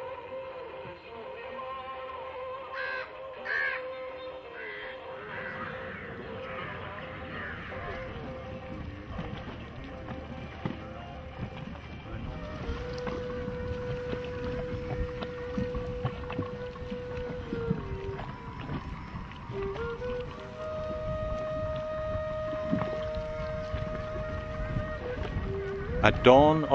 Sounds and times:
Boat, Water vehicle: 0:00.0 - 0:26.7
Music: 0:00.0 - 0:26.7.

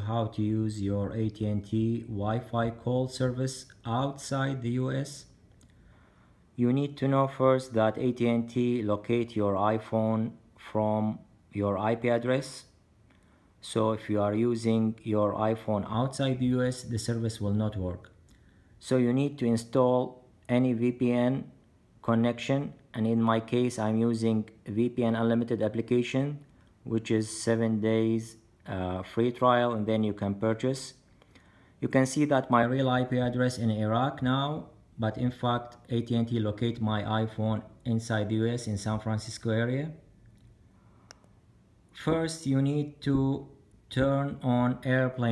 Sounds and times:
Speech: 0:00.0 - 0:05.4, 0:06.6 - 0:12.8, 0:13.6 - 0:18.2, 0:18.8 - 0:31.0, 0:31.8 - 0:40.1, 0:41.9 - 0:45.3.

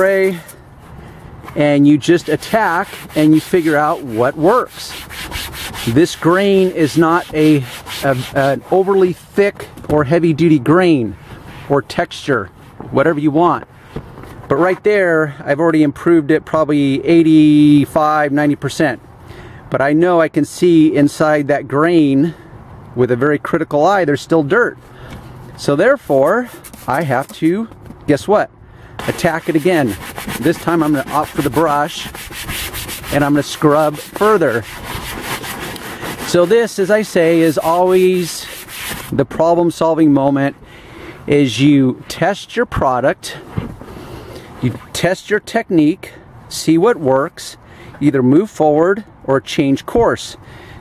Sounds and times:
Speech: 0:00.0 - 0:00.5, 0:01.6 - 0:04.9, 0:05.8 - 0:13.7, 0:14.5 - 0:19.0, 0:19.7 - 0:22.4, 0:23.0 - 0:24.8, 0:25.6 - 0:32.1, 0:33.1 - 0:34.6, 0:36.3 - 0:38.5, 0:39.1 - 0:40.6, 0:41.3 - 0:43.4, 0:44.6 - 0:50.4.

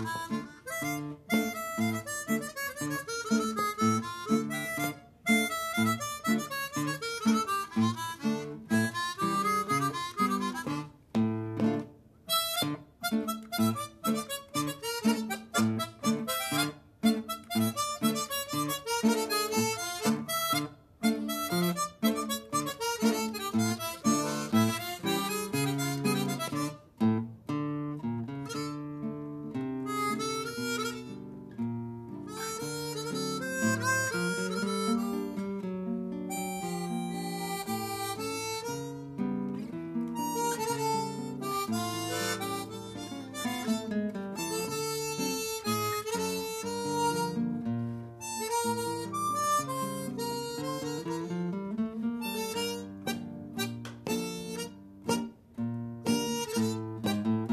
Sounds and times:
Harmonica: 0:00.0 - 0:27.3, 0:28.3 - 0:55.4, 0:56.0 - 0:57.5
Guitar: 0:00.0 - 0:57.5.

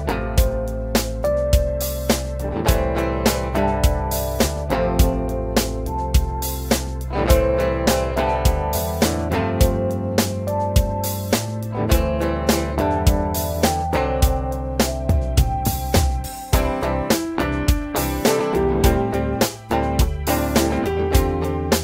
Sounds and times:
Music: 0:00.0 - 0:21.8.

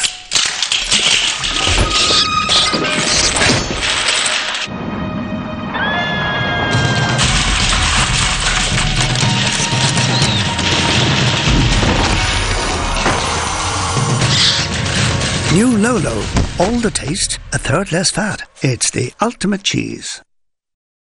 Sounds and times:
Music: 0:00.0 - 0:20.3
Speech: 0:15.5 - 0:20.3.

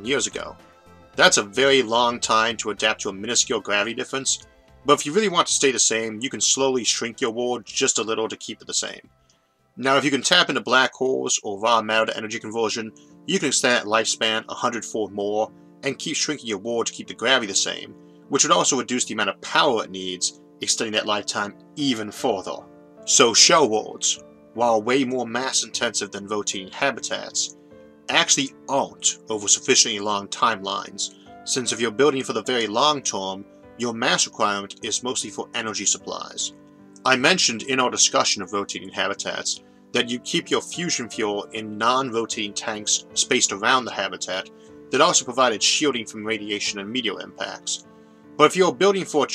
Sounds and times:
Narration, monologue: 0:00.0 - 0:49.3.

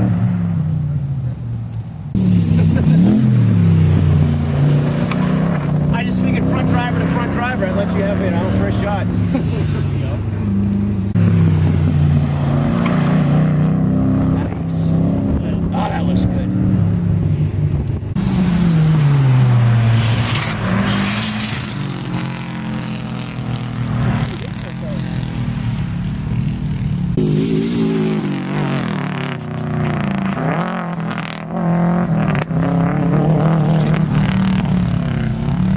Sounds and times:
Outside, rural or natural: 0:00.0 - 0:35.7
Race car, auto racing: 0:00.0 - 0:35.7.

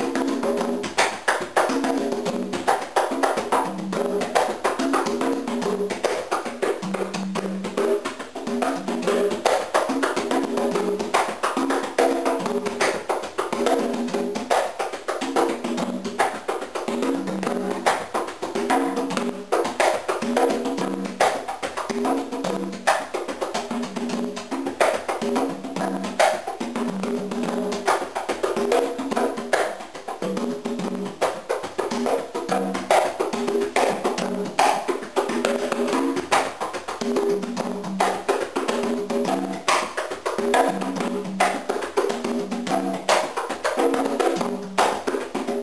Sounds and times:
Percussion: 0:00.0 - 0:45.6.

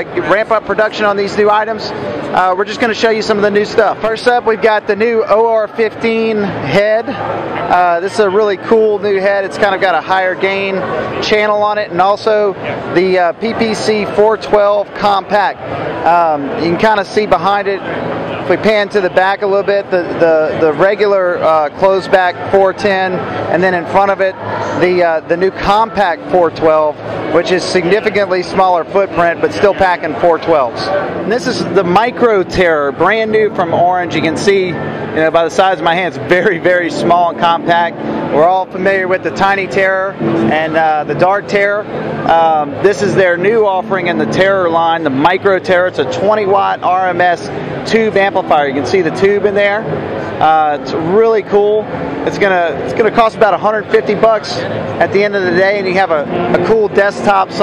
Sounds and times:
Speech: 0:00.0 - 0:57.6.

